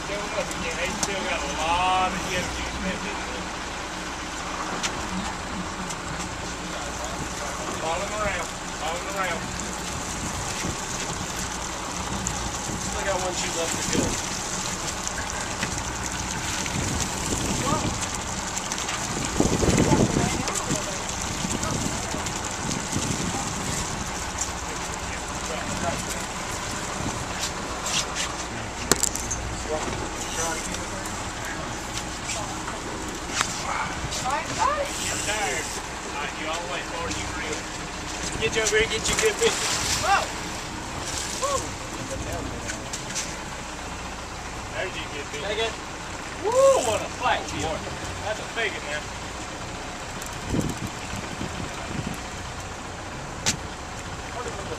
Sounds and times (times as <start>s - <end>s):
Motorboat, speedboat: 0.0s - 54.7s.